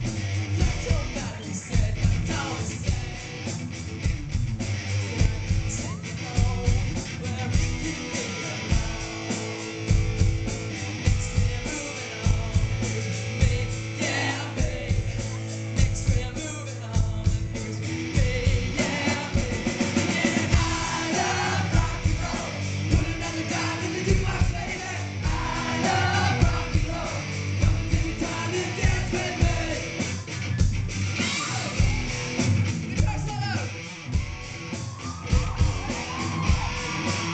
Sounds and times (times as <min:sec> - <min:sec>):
Rock and roll: 0:00.0 - 0:37.3.